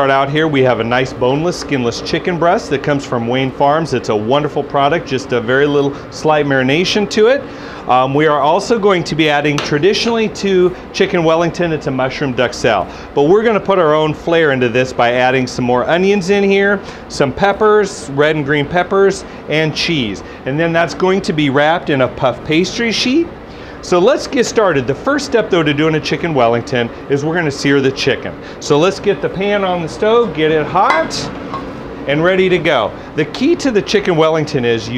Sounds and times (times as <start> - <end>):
Speech: 0.0 - 31.3, 32.1 - 34.9.